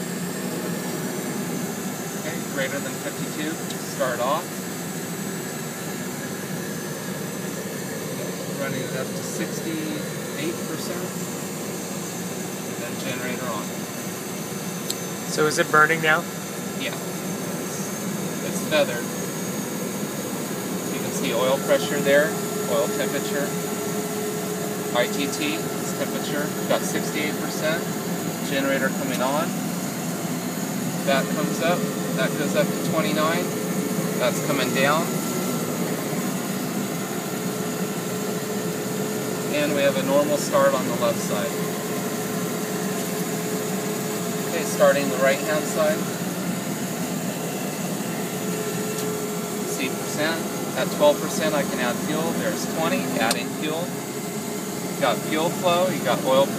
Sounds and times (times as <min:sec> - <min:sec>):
Aircraft: 0:00.0 - 0:56.5
Speech: 0:02.2 - 0:04.5, 0:08.6 - 0:11.2, 0:12.8 - 0:13.7, 0:15.3 - 0:17.0, 0:18.4 - 0:19.1, 0:20.9 - 0:23.6, 0:24.9 - 0:29.6, 0:31.0 - 0:33.5, 0:34.2 - 0:35.1, 0:39.5 - 0:41.6, 0:44.5 - 0:46.1, 0:49.7 - 0:53.9, 0:55.0 - 0:56.5.